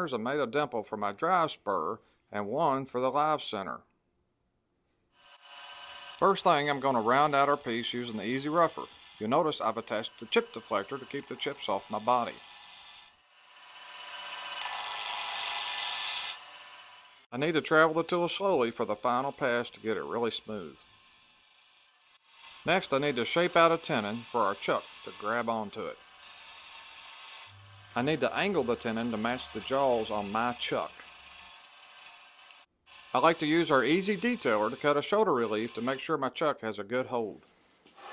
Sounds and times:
Speech: 0.0 - 3.8, 6.2 - 12.4, 17.4 - 20.8, 22.7 - 26.0, 28.0 - 31.0, 33.2 - 37.4.

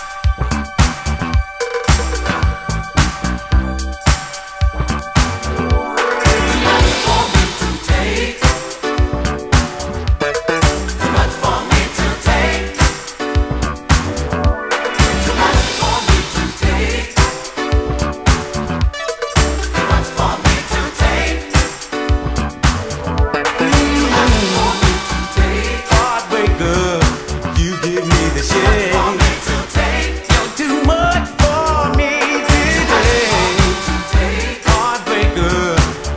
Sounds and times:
Funk: 0.3 - 36.1.

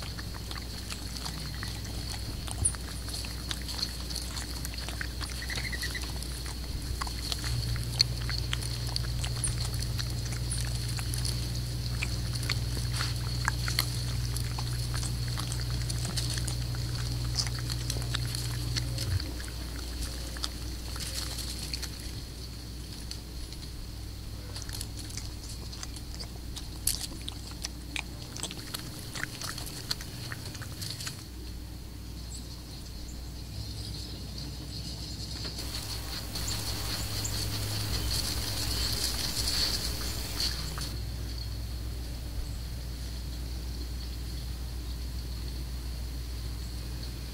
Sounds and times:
Wild animals: 0.0 - 22.3, 35.6 - 41.0.

